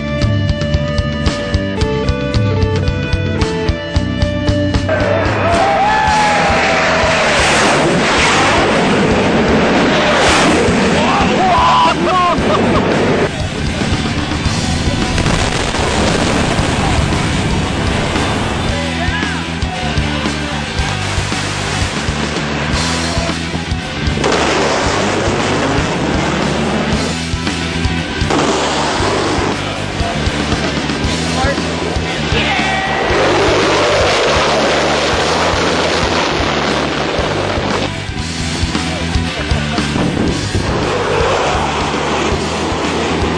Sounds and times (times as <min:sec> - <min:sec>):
Fixed-wing aircraft, airplane: 0:00.0 - 0:43.3.